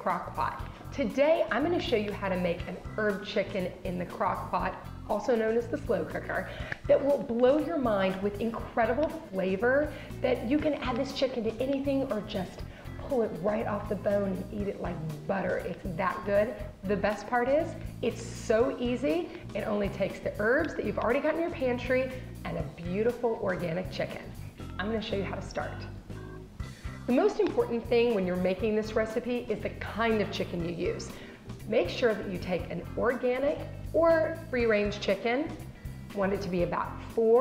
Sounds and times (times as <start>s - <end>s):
Speech: 0.0s - 25.9s, 27.1s - 31.1s, 31.7s - 37.4s
Music: 0.0s - 37.4s.